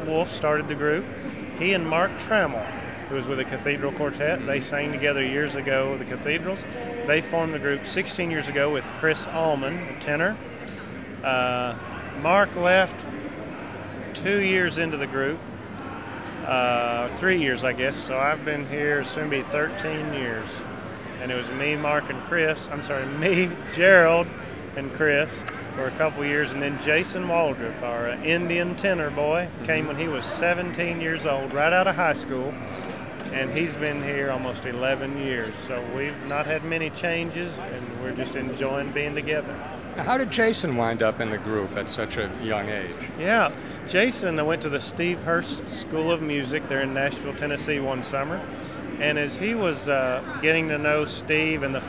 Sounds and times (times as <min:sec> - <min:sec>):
Speech: 0:00.0 - 0:10.5, 0:11.2 - 0:51.8.